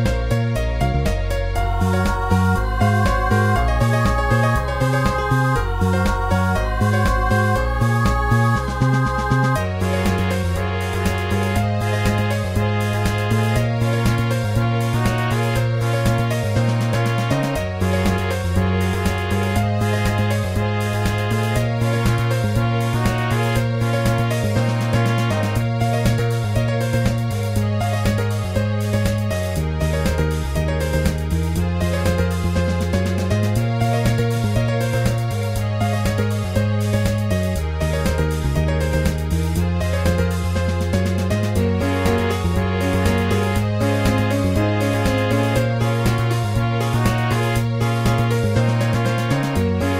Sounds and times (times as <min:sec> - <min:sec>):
Music: 0:00.0 - 0:49.9.